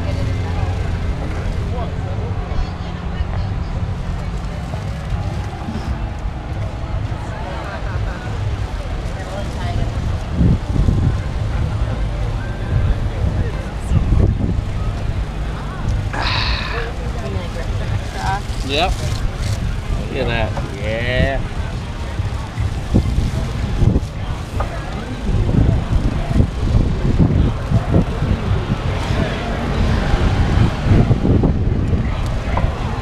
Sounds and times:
Outside, rural or natural: 0.0 - 33.0.

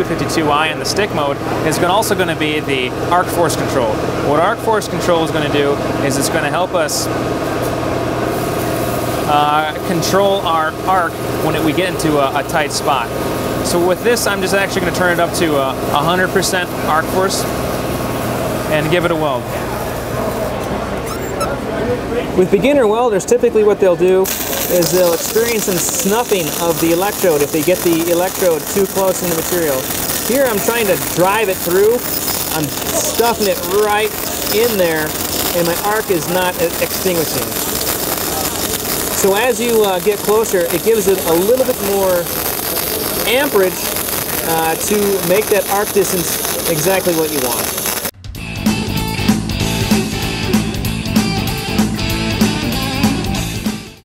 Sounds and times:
Speech: 0.0 - 7.2, 9.2 - 17.5, 18.7 - 37.6, 39.2 - 42.3, 43.0 - 47.7
Music: 48.2 - 54.0.

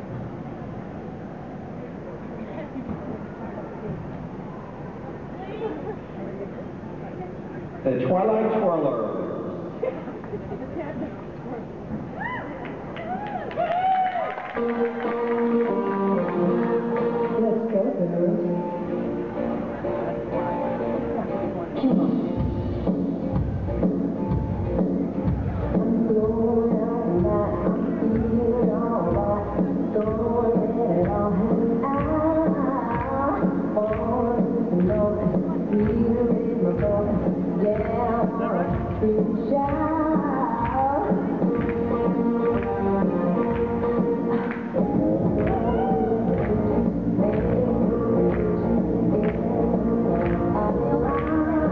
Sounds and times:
Inside, large room or hall: 0.0 - 51.7
Music: 13.9 - 51.7.

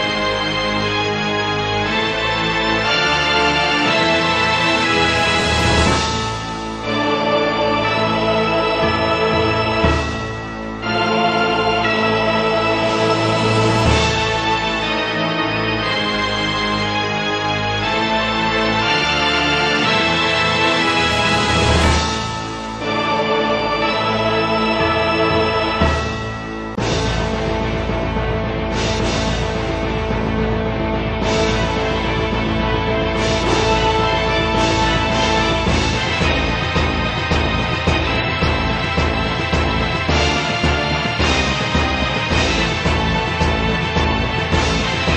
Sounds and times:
Independent music: 0.0 - 45.1.

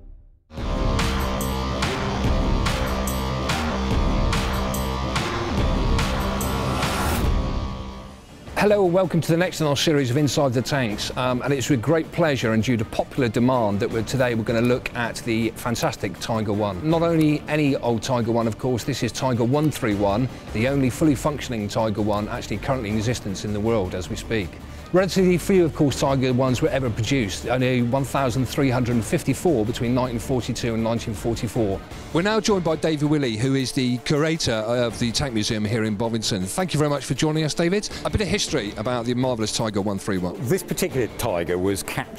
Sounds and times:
Music: 0.0 - 42.1
Speech: 8.6 - 42.1.

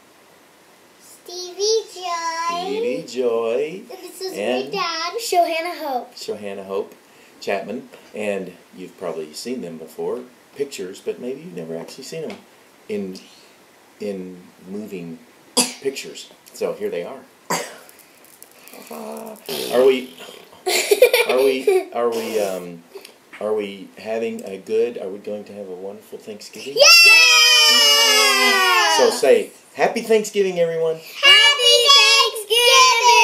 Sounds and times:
Belly laugh: 20.7 - 22.0.

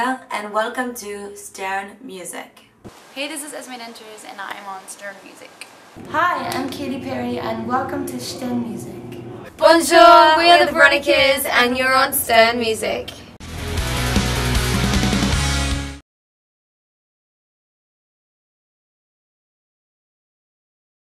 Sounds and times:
Speech: 0.0 - 13.3
Music: 13.4 - 16.0.

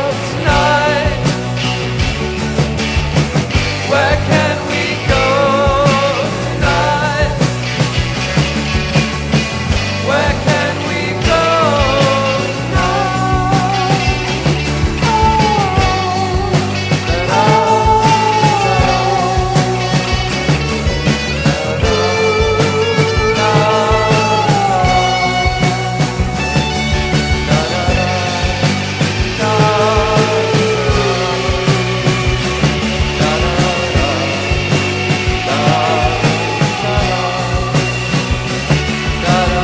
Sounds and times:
Psychedelic rock: 0.0 - 39.6.

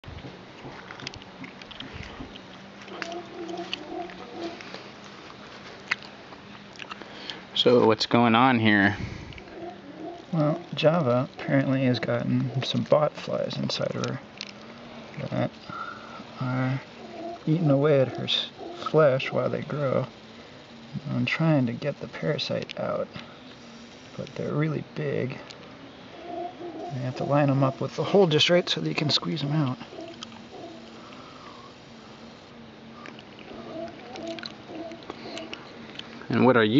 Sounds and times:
Speech: 7.6 - 9.0, 10.4 - 14.2, 17.5 - 20.1, 21.0 - 23.2, 24.2 - 25.5, 27.0 - 29.8, 36.3 - 36.7.

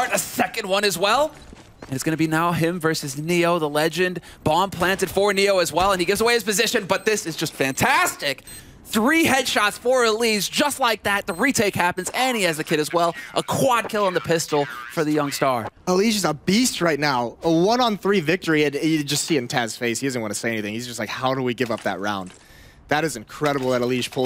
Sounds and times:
Speech: 0.0 - 1.3, 1.9 - 22.3, 22.9 - 24.2.

